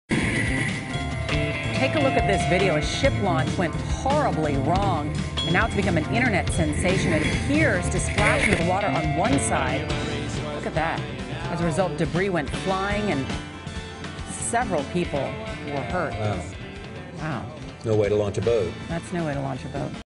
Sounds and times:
Music: 0:00.1 - 0:20.0.

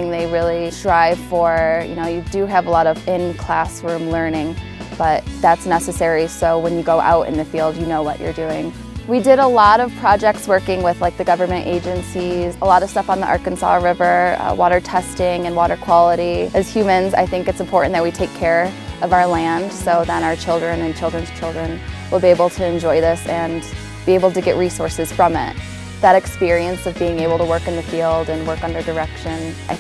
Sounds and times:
Music: 0:00.0 - 0:29.8
Speech: 0:00.0 - 0:29.8.

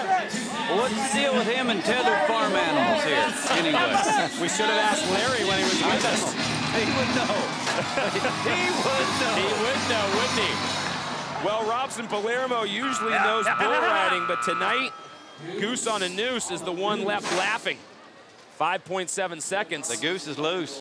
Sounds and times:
Speech: 0:11.4 - 0:17.8.

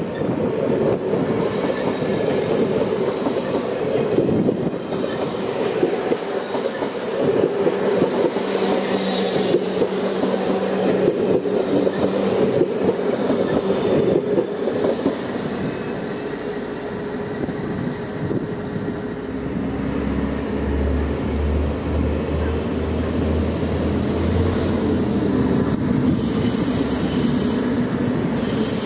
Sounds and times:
Outside, rural or natural: 0:00.0 - 0:28.8
Railroad car, train wagon: 0:00.0 - 0:28.8
Train: 0:00.0 - 0:28.8.

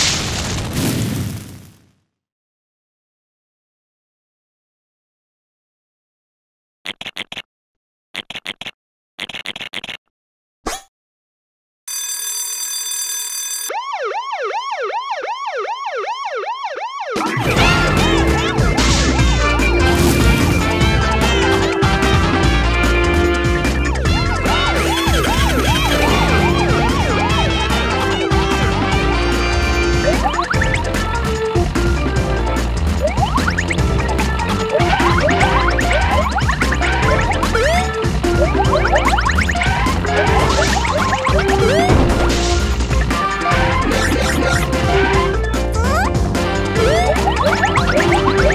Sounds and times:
Emergency vehicle: 0:13.0 - 0:42.1, 0:46.7 - 0:48.5
Music: 0:17.2 - 0:48.5.

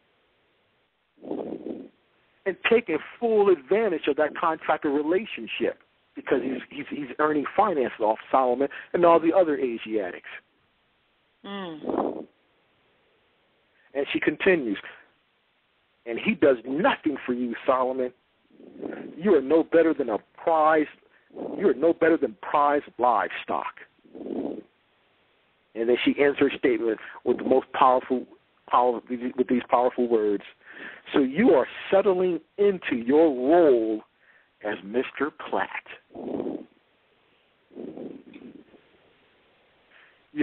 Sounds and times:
Speech: 0:02.5 - 0:10.4, 0:11.5 - 0:11.9, 0:13.9 - 0:15.1, 0:16.1 - 0:18.2, 0:18.8 - 0:21.0, 0:21.6 - 0:23.9, 0:25.8 - 0:36.1.

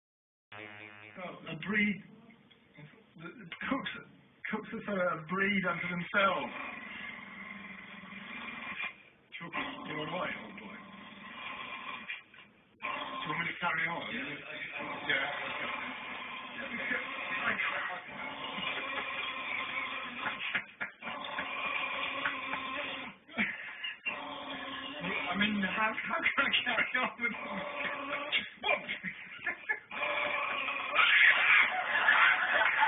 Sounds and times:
Speech: 0:01.2 - 0:06.5, 0:09.4 - 0:10.8, 0:13.3 - 0:15.5, 0:16.6 - 0:18.1, 0:25.0 - 0:27.4.

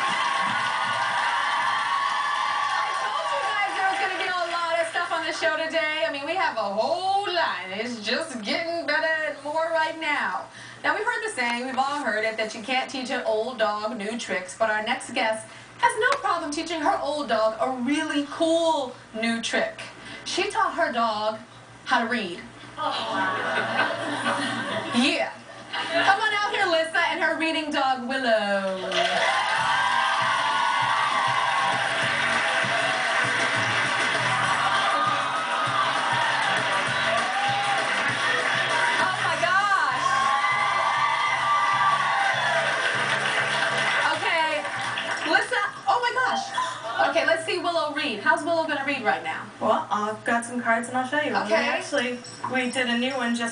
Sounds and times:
Music: 0:30.2 - 0:45.2.

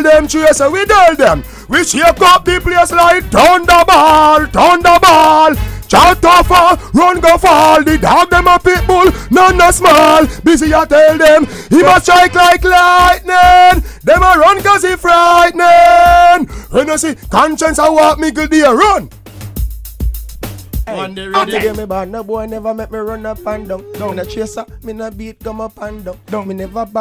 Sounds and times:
Music: 0:00.0 - 0:27.0.

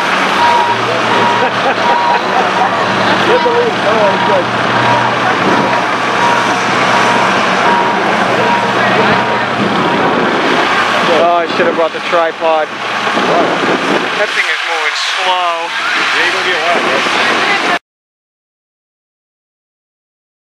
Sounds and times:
Speech: 0:00.8 - 0:06.6, 0:08.2 - 0:09.6, 0:11.0 - 0:12.7, 0:14.2 - 0:17.8.

